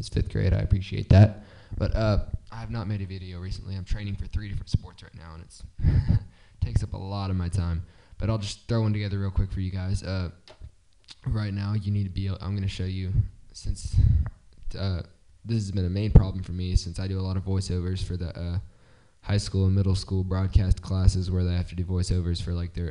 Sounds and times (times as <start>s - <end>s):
Speech: 0.0s - 10.4s, 11.1s - 22.9s.